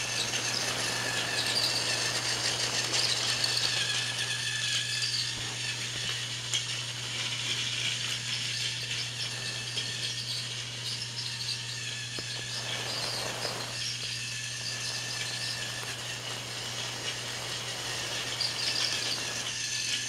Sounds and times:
Train: 0:00.0 - 0:20.0.

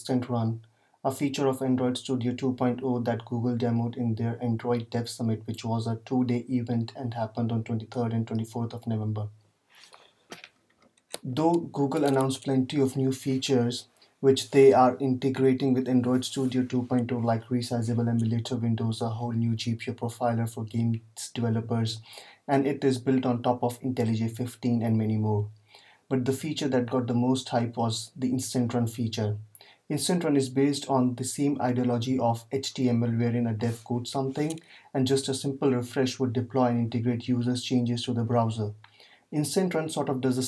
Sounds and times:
Speech: 0:00.0 - 0:09.4, 0:11.2 - 0:40.4.

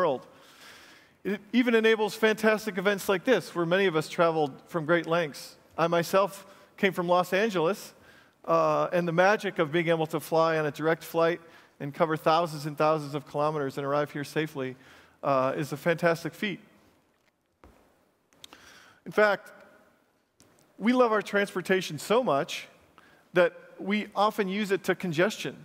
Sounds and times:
Speech: 0:00.0 - 0:00.3, 0:01.3 - 0:16.7, 0:19.1 - 0:19.6, 0:20.8 - 0:22.8, 0:23.4 - 0:25.6.

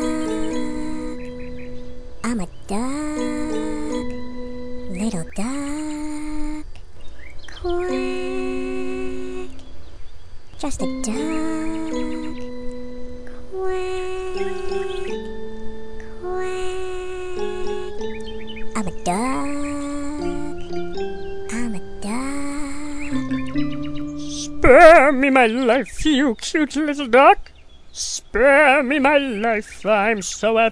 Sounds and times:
Music: 0:00.0 - 0:05.4, 0:07.7 - 0:09.6, 0:10.6 - 0:25.7
Speech: 0:02.2 - 0:03.2, 0:04.9 - 0:05.8, 0:10.6 - 0:11.4, 0:18.8 - 0:19.5, 0:21.5 - 0:22.4, 0:24.3 - 0:30.7.

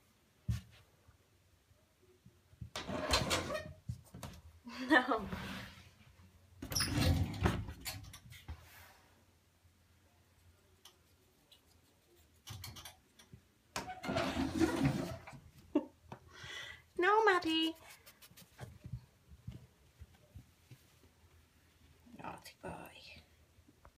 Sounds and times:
Speech: 0:04.7 - 0:05.4, 0:17.0 - 0:17.9, 0:22.1 - 0:23.3.

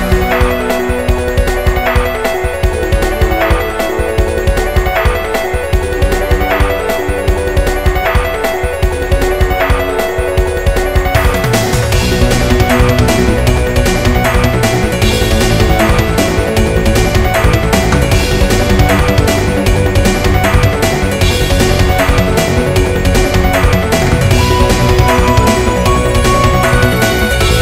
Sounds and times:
Music: 0:00.0 - 0:27.6.

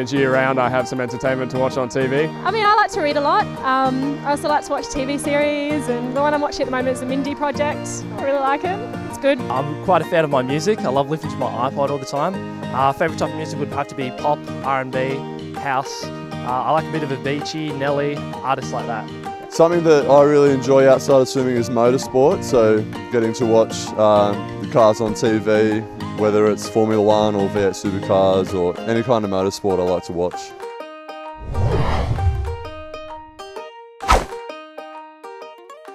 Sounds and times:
Male speech, man speaking: 0:00.0 - 0:02.3, 0:09.5 - 0:30.5
Music: 0:00.0 - 0:35.9.

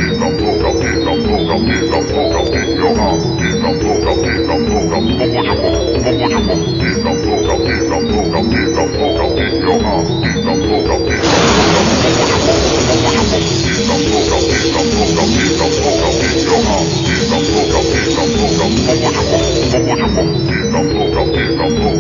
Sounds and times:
Music: 0:00.0 - 0:22.0.

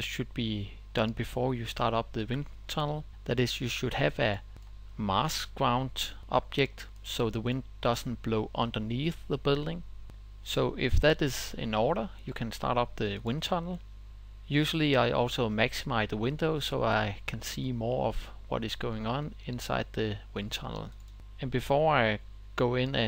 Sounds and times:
Speech: 0:00.0 - 0:13.8, 0:14.5 - 0:23.0.

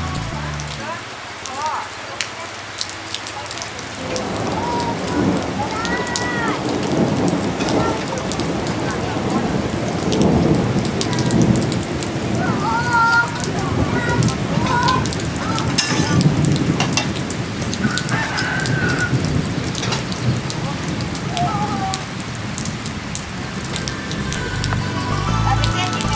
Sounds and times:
Raindrop: 0:00.0 - 0:26.1
Thunderstorm: 0:04.0 - 0:24.8.

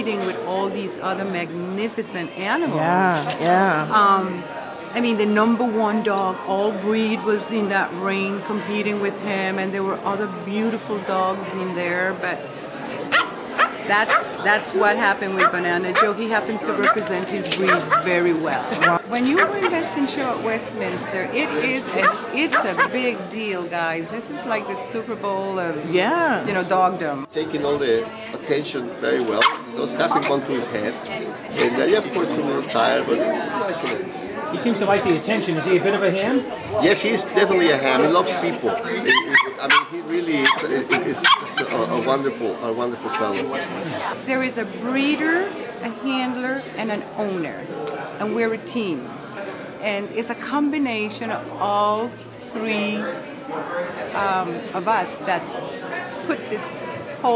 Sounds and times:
Bow-wow: 0:13.1 - 0:14.3, 0:15.4 - 0:16.2, 0:29.4 - 0:30.3, 0:39.1 - 0:41.7.

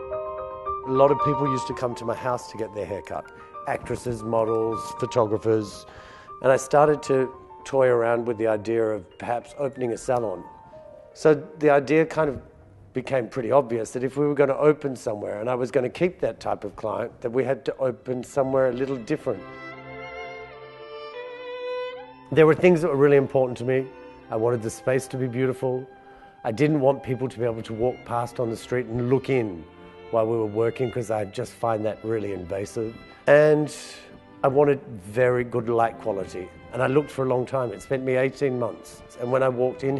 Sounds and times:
Music: 0:00.0 - 0:39.9
Speech: 0:00.9 - 0:05.8, 0:06.4 - 0:10.5, 0:11.2 - 0:12.4, 0:13.0 - 0:19.4, 0:22.3 - 0:25.9, 0:26.5 - 0:29.6, 0:30.2 - 0:39.9.

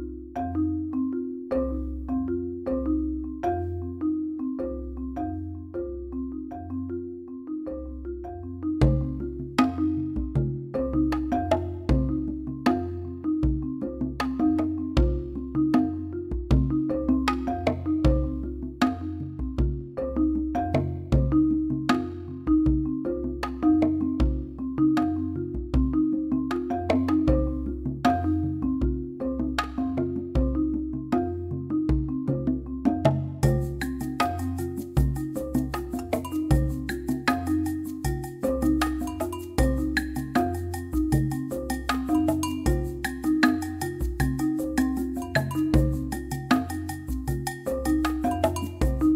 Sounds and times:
Music: 0:00.0 - 0:49.1.

